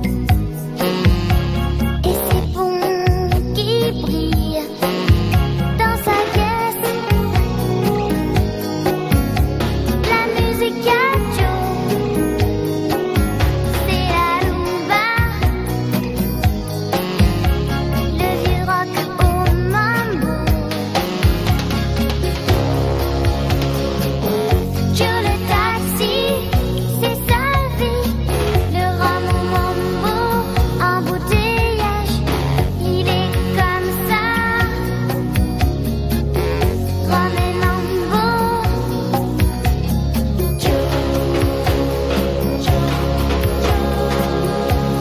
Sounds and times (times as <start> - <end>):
Music: 0.0 - 45.0.